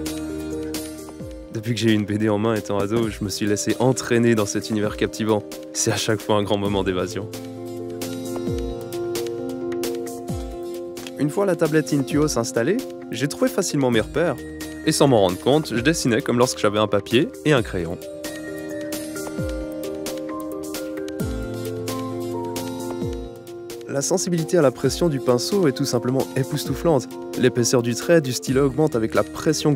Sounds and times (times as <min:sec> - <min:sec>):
Music: 0:00.0 - 0:29.7
Speech: 0:01.6 - 0:07.3, 0:11.2 - 0:18.0, 0:23.9 - 0:29.7.